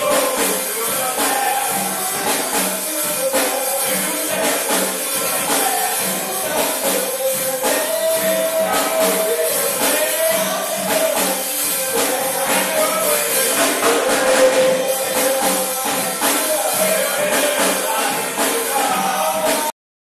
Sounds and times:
Bass drum: 0.0 - 19.7
Drum kit: 0.0 - 19.8.

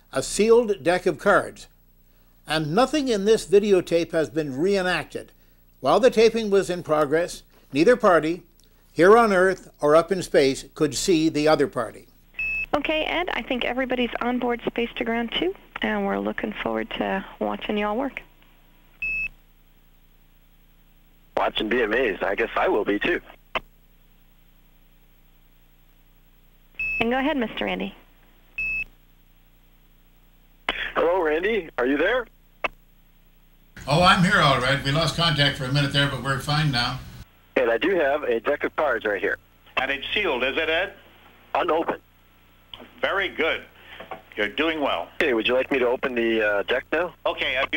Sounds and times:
Speech: 0.1 - 1.7, 2.5 - 12.1, 21.4 - 23.3, 33.8 - 41.0, 44.4 - 47.7.

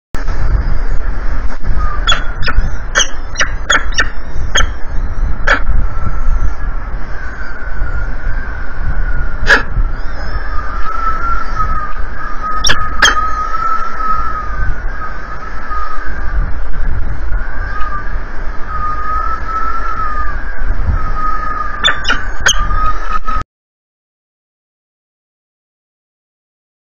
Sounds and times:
Bird: 1.7 - 16.3, 18.7 - 23.4.

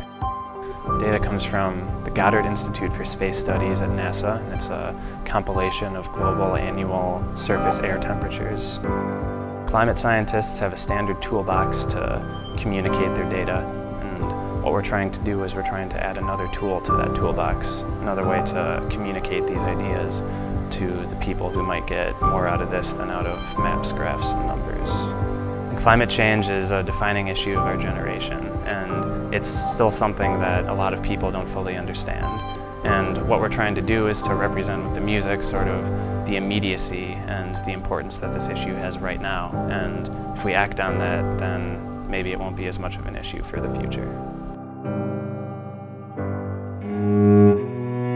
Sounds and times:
Classical music: 0.0 - 42.6, 43.4 - 48.1
Cello: 0.0 - 44.6, 46.7 - 48.1
Speech: 0.9 - 8.9, 9.7 - 44.2.

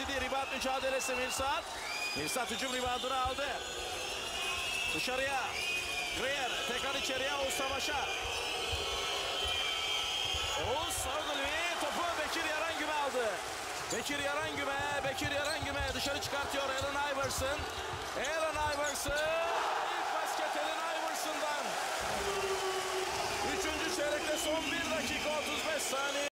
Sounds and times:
Speech: 0.0 - 1.6, 2.2 - 3.6, 4.9 - 5.5, 6.2 - 8.1, 10.6 - 17.6, 18.2 - 21.7, 23.4 - 26.3.

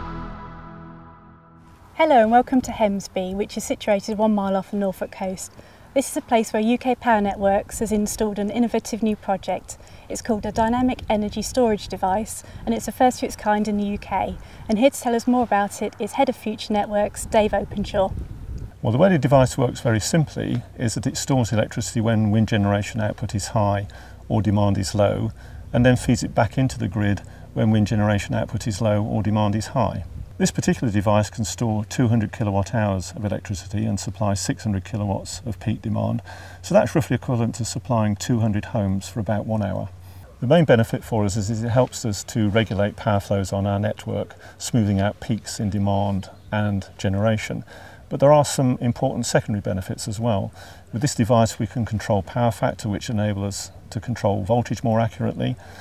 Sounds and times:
Speech: 2.0 - 18.2, 18.8 - 55.6.

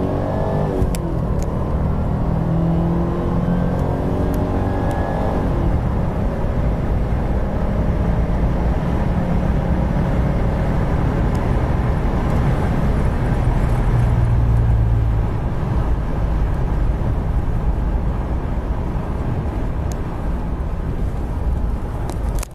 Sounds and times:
Car: 0.0 - 22.5.

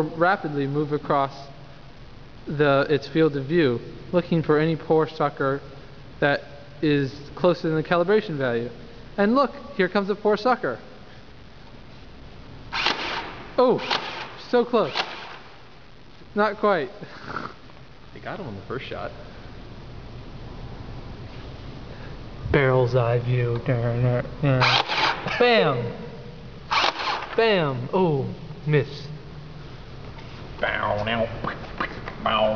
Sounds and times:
Speech: 0.0 - 1.5, 2.5 - 5.6, 6.2 - 10.8, 18.2 - 19.2, 22.5 - 24.6, 25.3 - 26.0, 27.4 - 29.1, 30.6 - 31.5, 32.2 - 32.5
Inside, large room or hall: 0.0 - 15.8, 18.4 - 32.5.

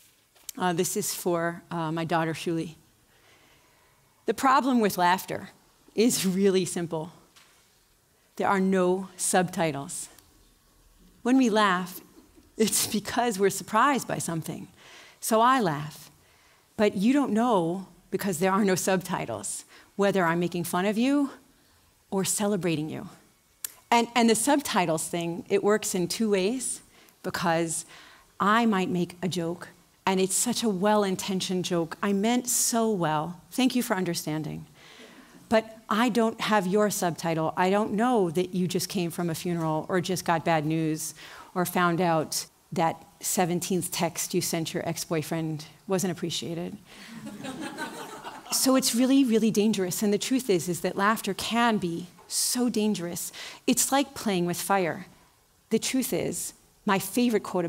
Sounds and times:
Speech: 0.5 - 2.8, 4.3 - 7.2, 8.4 - 10.2, 11.2 - 12.0, 12.6 - 16.1, 16.8 - 21.4, 22.1 - 23.2, 23.9 - 34.7, 35.5 - 46.8, 48.5 - 55.1, 55.7 - 57.6.

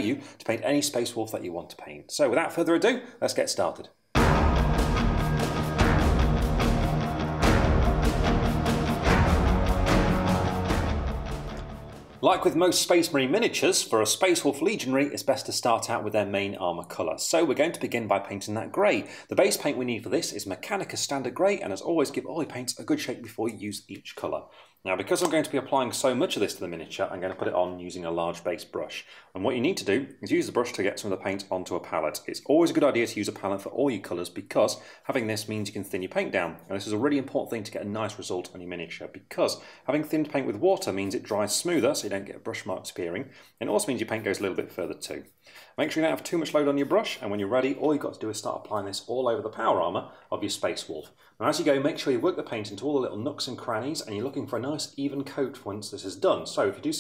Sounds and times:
Speech: 0.0 - 4.0, 12.2 - 57.0
Music: 4.2 - 12.4.

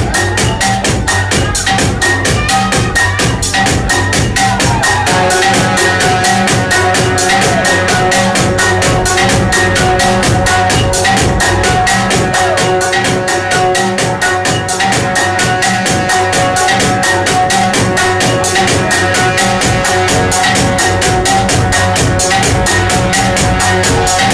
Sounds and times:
Music: 0.0 - 24.3.

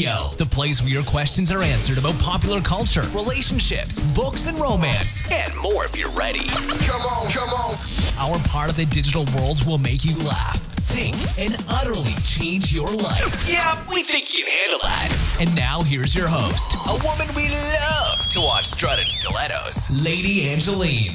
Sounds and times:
Music: 0.0 - 14.0, 14.8 - 21.1
Speech: 0.0 - 21.1.

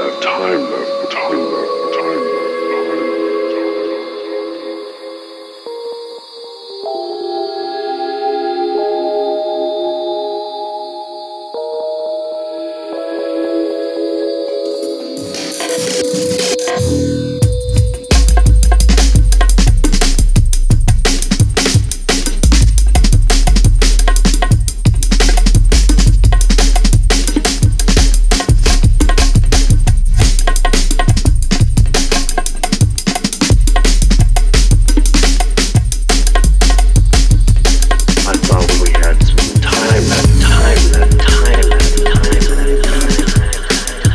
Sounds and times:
Drum and bass: 15.2 - 44.1.

